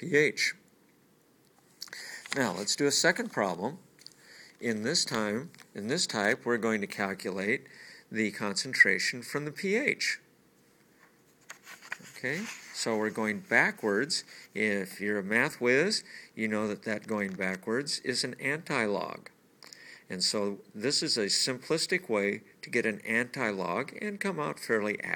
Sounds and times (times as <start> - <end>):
Speech: 0.0 - 0.7, 2.3 - 3.9, 4.6 - 10.3, 12.1 - 19.4, 20.1 - 25.1
Inside, small room: 0.0 - 25.1
Writing: 11.5 - 14.5.